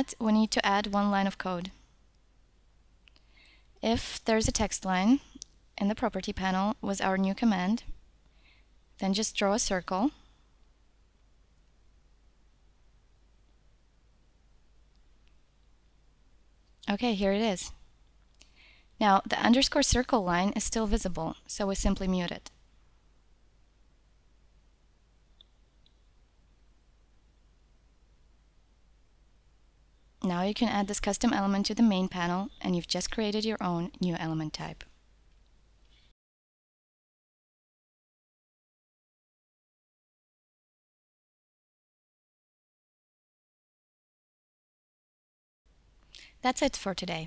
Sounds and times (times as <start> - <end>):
Speech: 0.0 - 1.8, 3.8 - 8.0, 9.0 - 10.2, 16.8 - 17.8, 19.0 - 22.5, 30.2 - 34.9, 46.4 - 47.2.